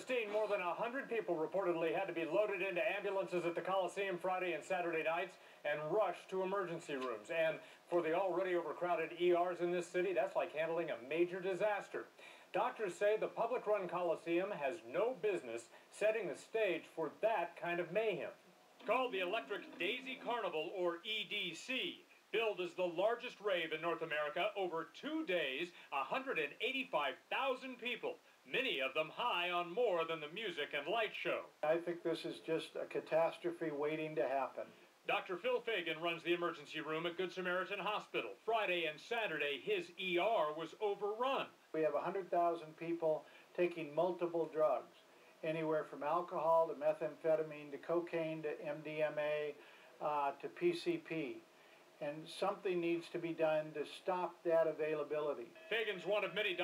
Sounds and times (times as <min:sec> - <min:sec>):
Speech: 0:00.0 - 0:56.6.